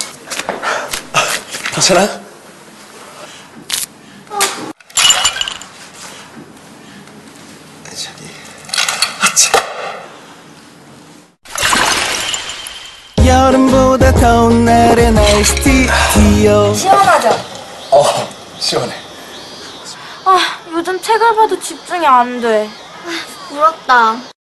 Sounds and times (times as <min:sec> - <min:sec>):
Music: 0:13.2 - 0:16.9.